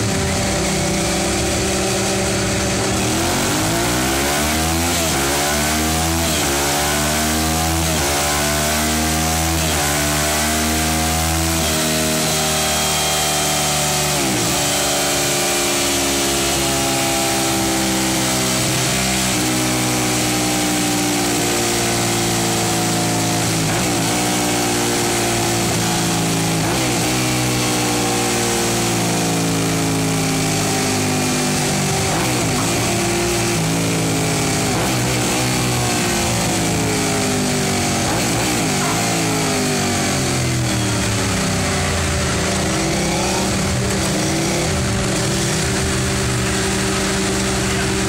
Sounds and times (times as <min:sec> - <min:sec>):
Motorcycle: 0:00.0 - 0:48.0.